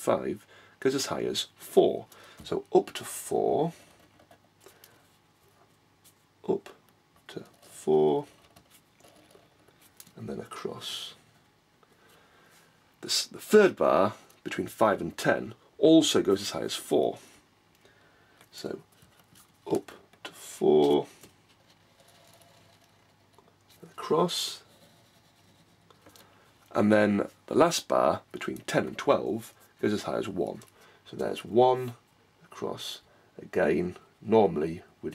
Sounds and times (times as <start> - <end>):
Speech: 0.0 - 3.8, 6.4 - 8.4, 10.1 - 11.2, 13.0 - 17.3, 18.5 - 18.8, 19.6 - 21.2, 23.8 - 24.7, 26.7 - 35.1.